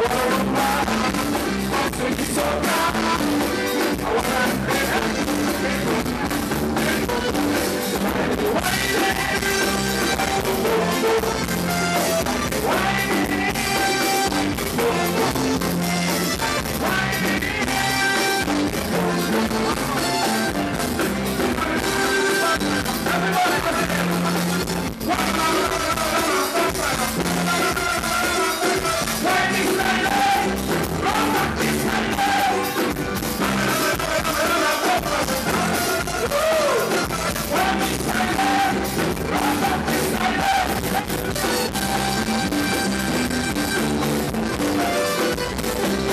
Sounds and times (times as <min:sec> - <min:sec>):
Music: 0:00.0 - 0:46.1.